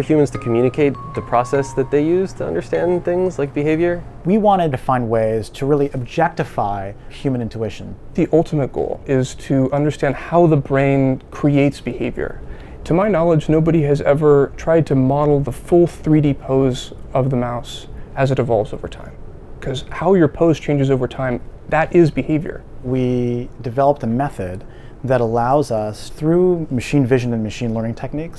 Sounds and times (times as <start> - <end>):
Speech: 0.0 - 28.3.